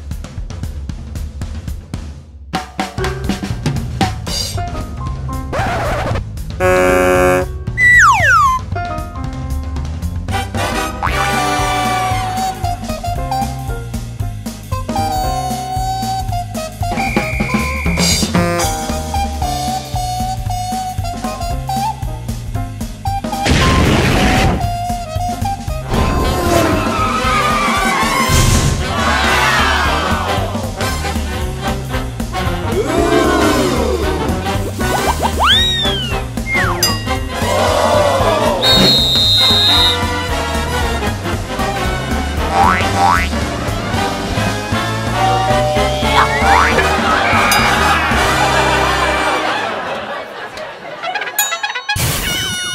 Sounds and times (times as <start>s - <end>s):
Music: 0.0s - 50.0s, 51.3s - 52.7s.